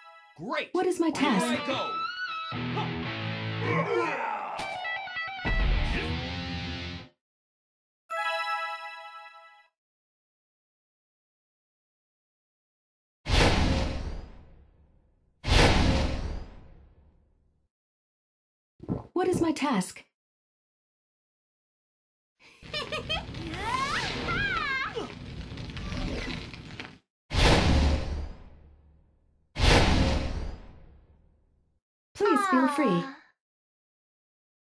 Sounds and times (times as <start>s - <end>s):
Speech: 0.4s - 2.0s, 19.2s - 20.0s, 32.2s - 33.3s.